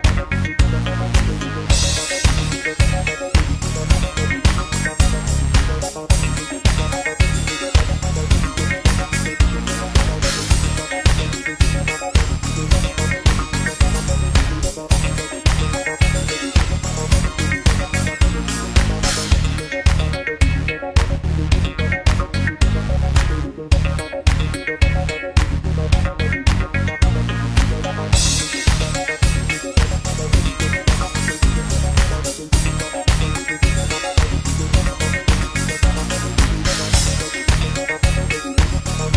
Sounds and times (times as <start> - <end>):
Music: 0.0 - 39.1.